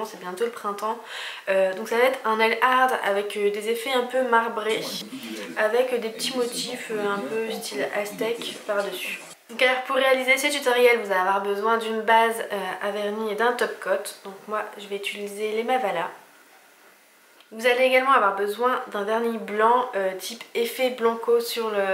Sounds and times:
Speech: 0.0s - 16.2s, 17.5s - 21.9s.

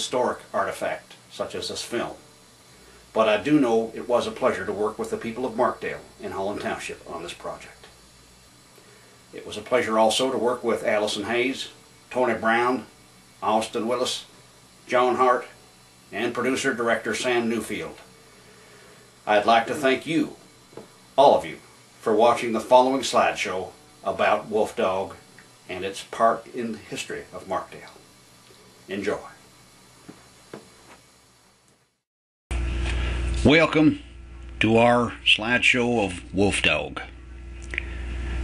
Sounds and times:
Speech: 0.0s - 2.2s, 3.1s - 8.0s, 9.3s - 14.3s, 14.9s - 18.0s, 19.2s - 20.4s, 21.2s - 28.0s, 28.9s - 29.4s, 33.4s - 37.1s.

